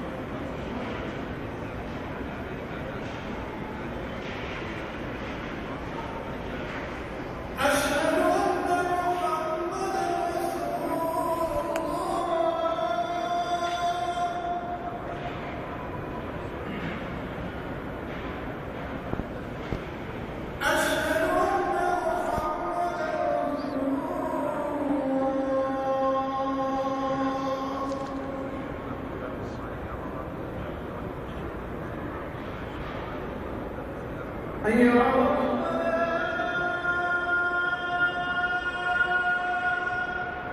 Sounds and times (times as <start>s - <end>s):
Inside, large room or hall: 0.0s - 40.5s.